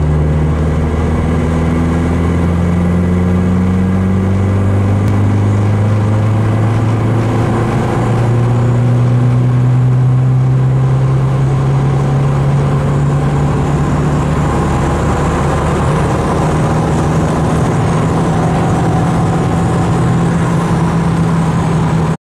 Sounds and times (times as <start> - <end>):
Vehicle: 0.0 - 22.2.